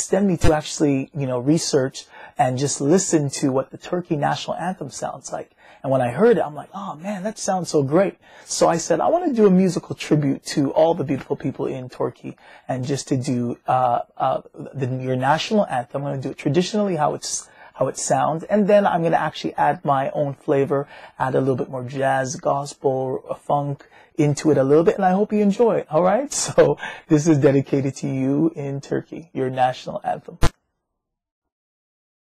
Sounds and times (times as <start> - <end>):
Speech: 0.0 - 30.5.